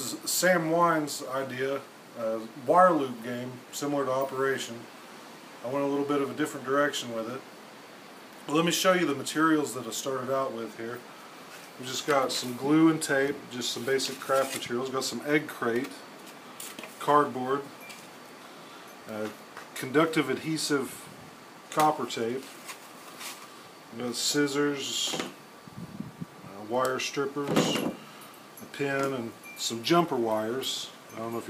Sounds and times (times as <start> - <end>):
Speech: 0.0 - 4.9, 5.6 - 7.5, 8.5 - 11.0, 11.8 - 16.0, 17.0 - 17.7, 19.1 - 21.1, 21.7 - 22.5, 23.9 - 25.4, 26.5 - 28.0, 28.7 - 31.5.